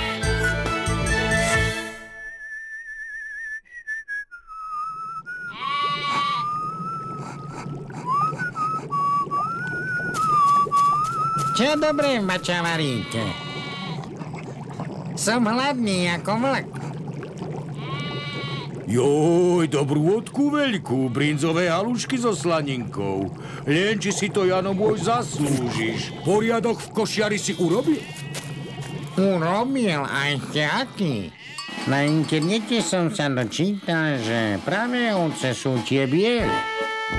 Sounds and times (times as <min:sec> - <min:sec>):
Bleat: 0:05.5 - 0:06.6, 0:12.6 - 0:14.1, 0:17.8 - 0:18.7, 0:20.9 - 0:21.8, 0:24.6 - 0:26.6, 0:27.3 - 0:29.6, 0:30.9 - 0:31.9, 0:33.4 - 0:34.3, 0:34.9 - 0:37.1
Speech: 0:11.6 - 0:13.4, 0:18.9 - 0:28.0, 0:29.2 - 0:31.3, 0:31.9 - 0:36.6.